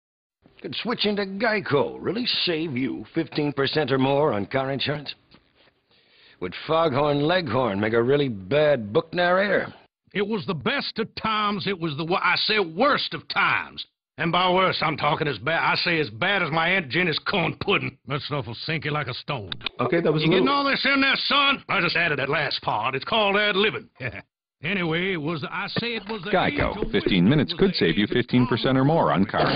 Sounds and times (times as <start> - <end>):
Speech: 0.6 - 5.2, 6.4 - 29.5.